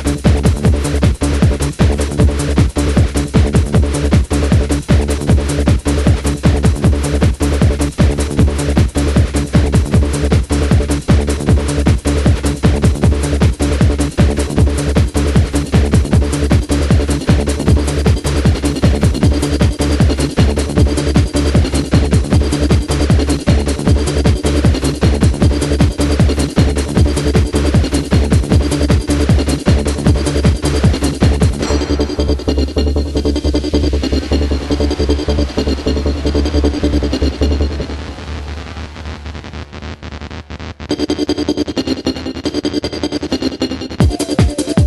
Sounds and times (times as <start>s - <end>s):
Trance music: 0.0s - 44.8s.